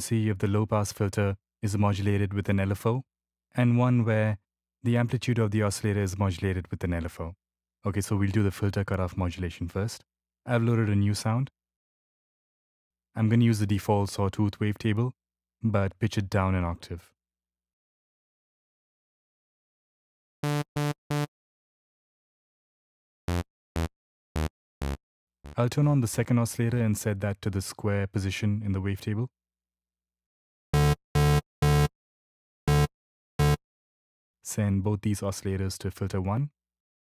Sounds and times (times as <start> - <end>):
Speech: 0.0 - 11.5, 13.2 - 17.1, 25.6 - 29.3, 34.5 - 36.6.